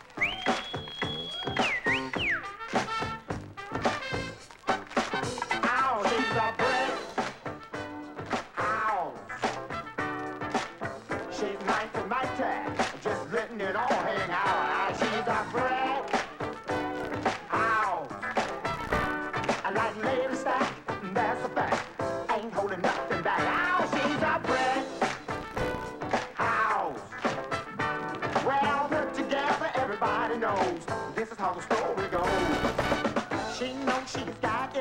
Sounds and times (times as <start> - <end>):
Song: 0.1 - 13.5, 14.1 - 30.6.